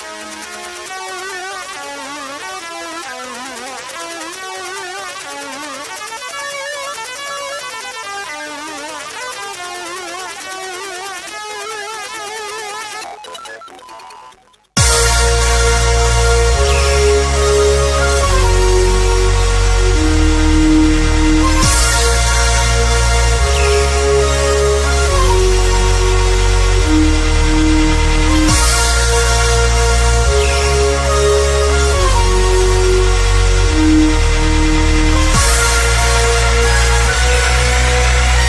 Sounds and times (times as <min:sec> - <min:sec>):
Dubstep: 0:00.0 - 0:38.4.